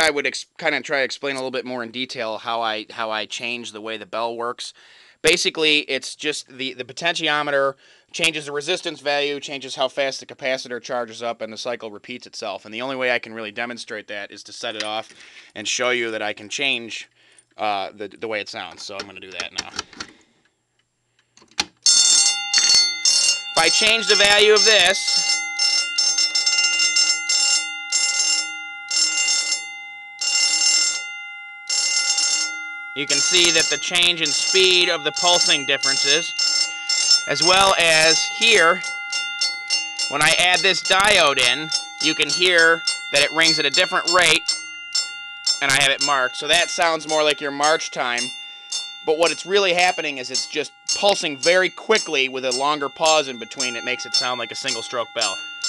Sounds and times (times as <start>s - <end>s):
Speech: 0.0s - 19.8s, 23.6s - 25.1s, 33.0s - 36.3s, 37.3s - 38.8s, 40.1s - 44.4s, 45.6s - 48.3s, 49.1s - 55.4s.